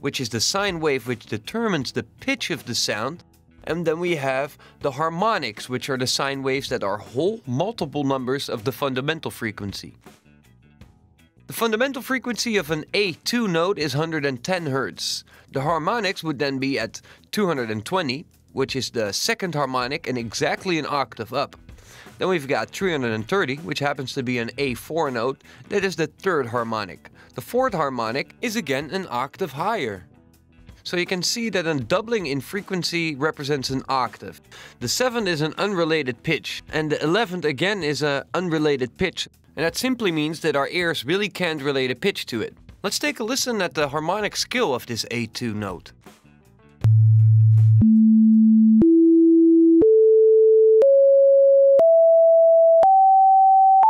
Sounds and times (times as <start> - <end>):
Speech: 0.0 - 10.0, 11.5 - 21.6, 22.2 - 30.0, 30.8 - 45.9
Music: 0.0 - 49.3.